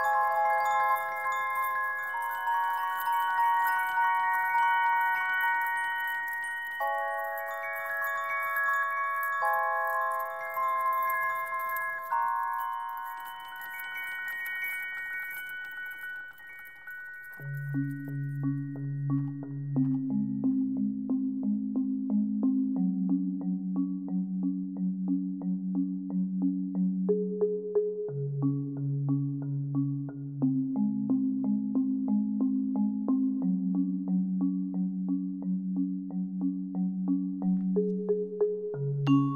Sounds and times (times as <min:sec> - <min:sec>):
Synthesizer: 0:00.0 - 0:39.3.